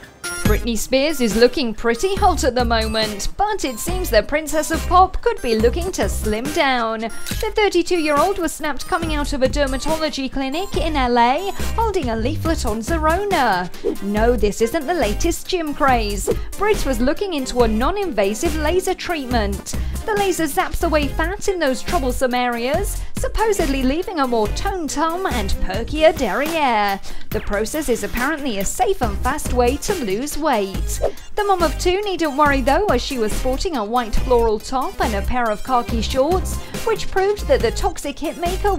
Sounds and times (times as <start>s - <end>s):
Music: 0.0s - 38.7s
Speech: 0.5s - 38.7s.